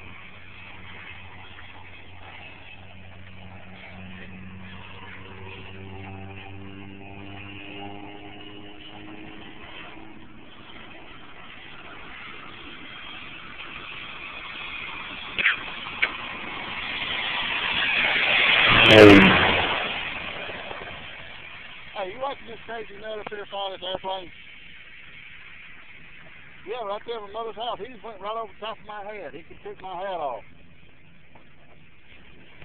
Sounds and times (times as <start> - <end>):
Aircraft: 0.0 - 32.6.